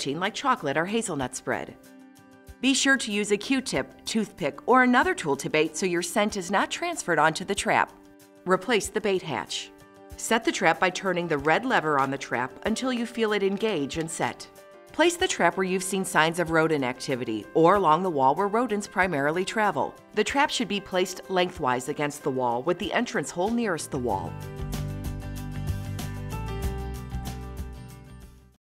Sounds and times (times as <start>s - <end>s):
Speech: 0.0s - 1.8s, 2.6s - 24.4s
Music: 0.0s - 28.6s.